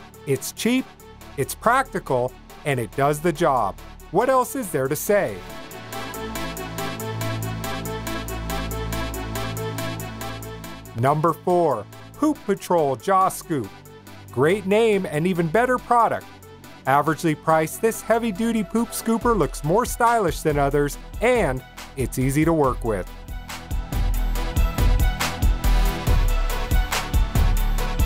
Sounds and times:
Music: 0.0s - 28.0s
Speech: 0.3s - 0.8s, 1.4s - 5.4s, 11.0s - 13.7s, 14.4s - 16.2s, 16.9s - 23.1s.

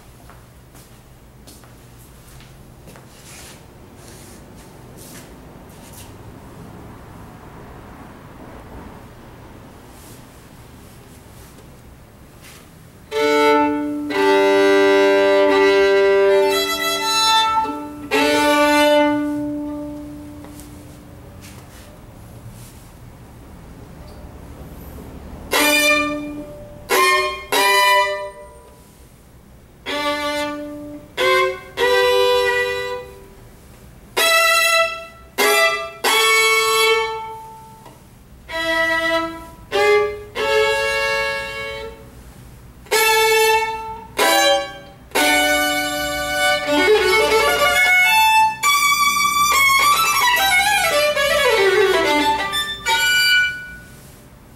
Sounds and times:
Violin, fiddle: 13.1s - 20.5s, 25.5s - 28.5s, 29.8s - 33.3s, 34.2s - 42.1s, 42.9s - 54.0s.

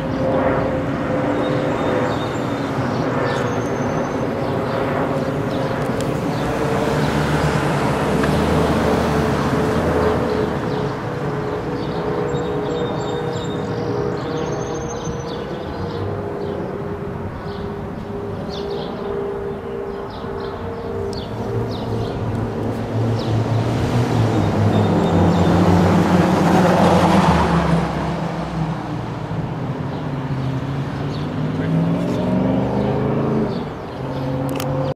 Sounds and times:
Medium engine (mid frequency): 5.7s - 34.9s
Car: 5.8s - 34.9s
Accelerating, revving, vroom: 6.3s - 11.0s, 21.6s - 29.1s, 30.2s - 34.9s.

